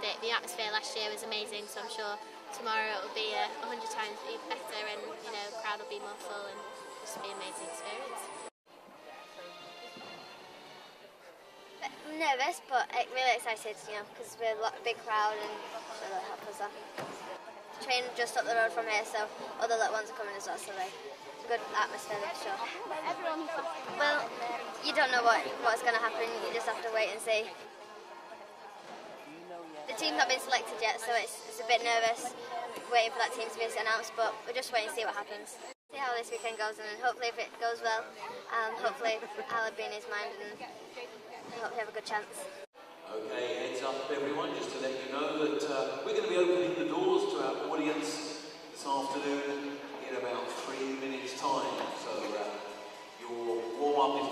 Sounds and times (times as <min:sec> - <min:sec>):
Music: 0:00.0 - 0:14.4, 0:42.8 - 0:46.5.